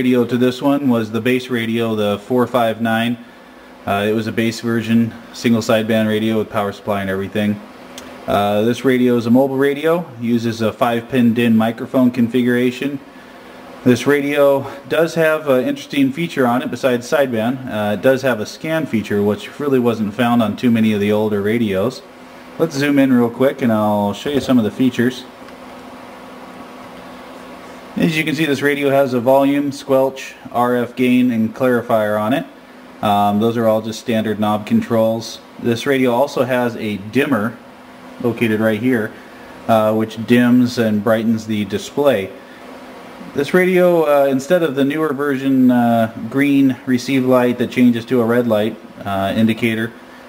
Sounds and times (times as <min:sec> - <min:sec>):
Speech: 0:00.0 - 0:07.7, 0:08.3 - 0:13.1, 0:13.8 - 0:25.4, 0:28.0 - 0:42.4, 0:43.2 - 0:50.0.